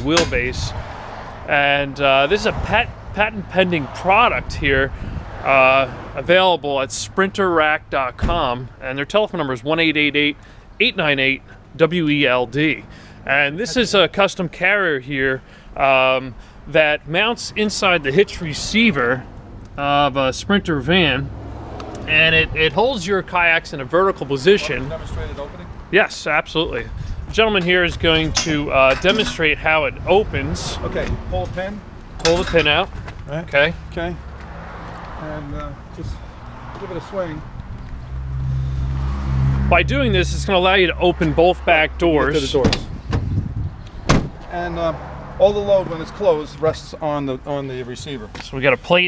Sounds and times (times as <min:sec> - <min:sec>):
Speech: 0:00.0 - 0:00.7, 0:01.5 - 0:04.9, 0:05.5 - 0:19.2, 0:19.8 - 0:21.3, 0:22.0 - 0:34.2, 0:35.2 - 0:36.2, 0:36.8 - 0:37.4, 0:39.7 - 0:42.9, 0:44.5 - 0:49.0.